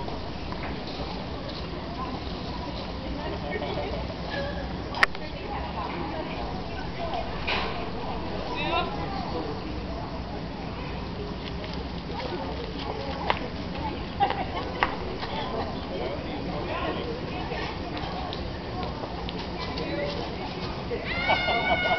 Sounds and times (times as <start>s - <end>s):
Speech: 0.4s - 21.9s.